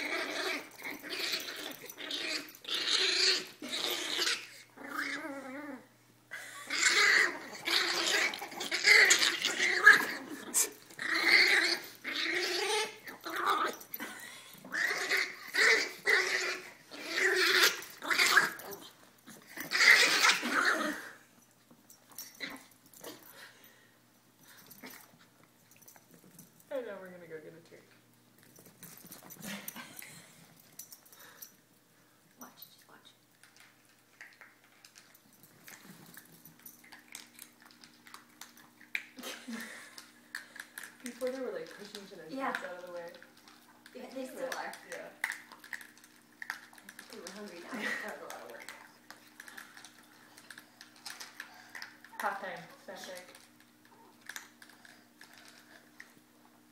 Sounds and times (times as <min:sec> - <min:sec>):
Speech: 0:26.7 - 0:28.0, 0:41.1 - 0:43.2, 0:43.9 - 0:45.2, 0:47.1 - 0:48.8, 0:52.2 - 0:53.4.